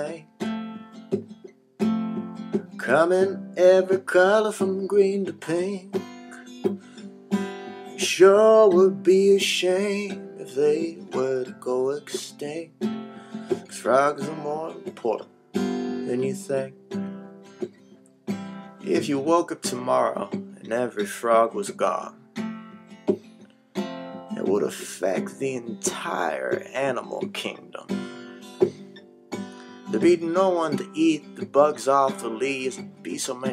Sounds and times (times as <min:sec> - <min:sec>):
Music: 0:00.0 - 0:33.5
Speech: 0:18.9 - 0:22.1, 0:24.4 - 0:27.9, 0:30.0 - 0:33.5.